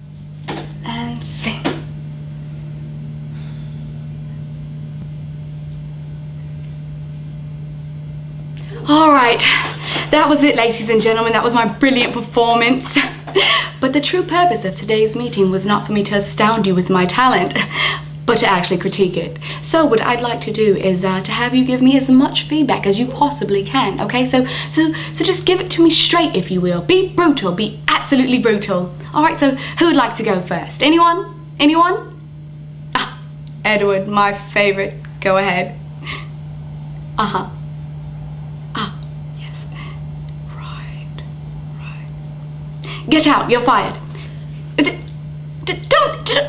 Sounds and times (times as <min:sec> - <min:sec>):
Narration, monologue: 0:00.4 - 0:02.3, 0:08.2 - 0:46.4.